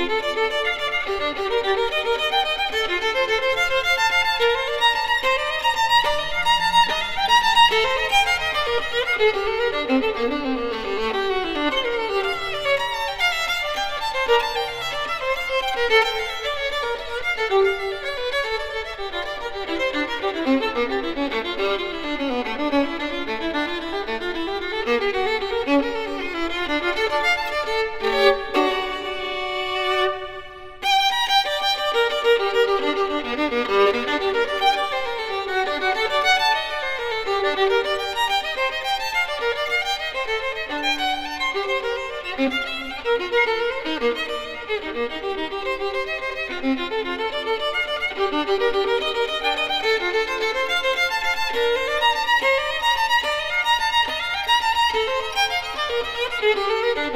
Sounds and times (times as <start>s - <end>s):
Violin, fiddle: 0.0s - 57.1s.